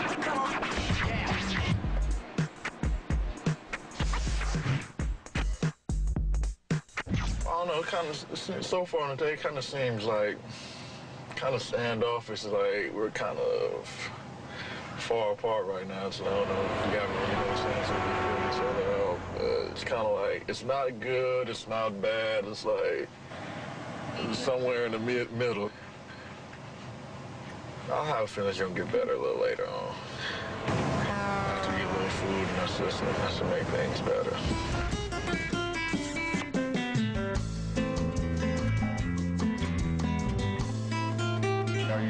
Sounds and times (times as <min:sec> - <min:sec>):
Speech: 0:07.5 - 0:10.4, 0:11.3 - 0:14.2, 0:15.0 - 0:23.1, 0:24.2 - 0:25.8, 0:27.9 - 0:30.0, 0:31.0 - 0:34.6, 0:41.8 - 0:42.0.